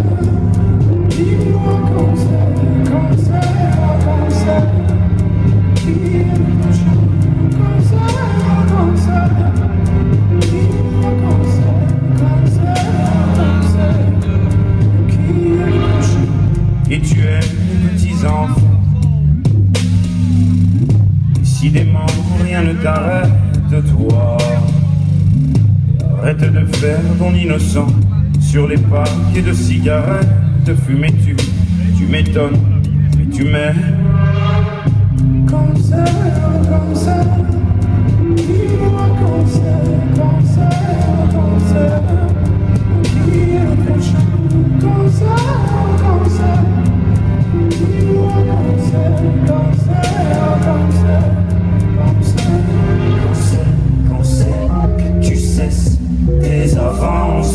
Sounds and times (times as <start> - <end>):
Soul music: 0.0 - 57.5.